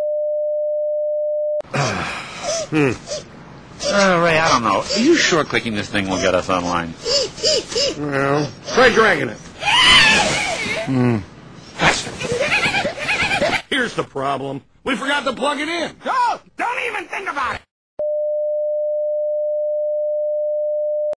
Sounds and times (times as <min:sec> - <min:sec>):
Speech: 0:13.7 - 0:17.7.